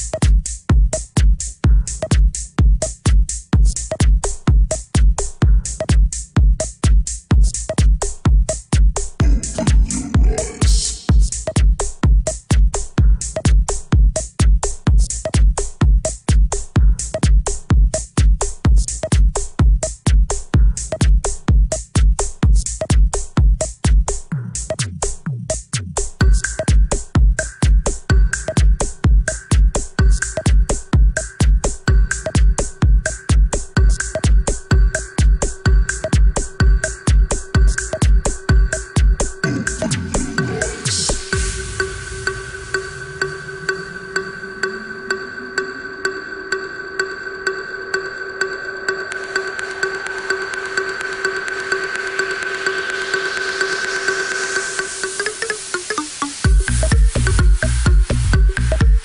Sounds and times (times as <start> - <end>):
House music: 0.0 - 59.0.